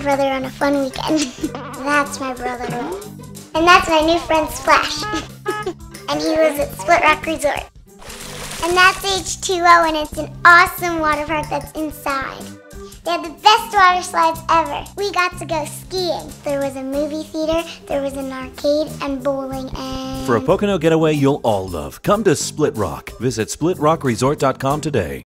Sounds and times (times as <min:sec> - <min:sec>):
Music: 0:00.0 - 0:25.2
Speech: 0:13.1 - 0:25.2.